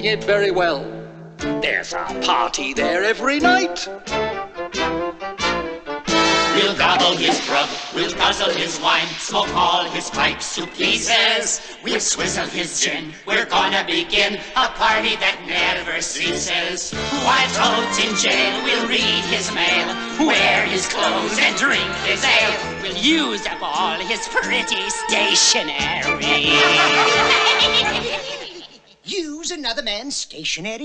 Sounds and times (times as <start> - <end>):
Music: 0.0 - 28.6.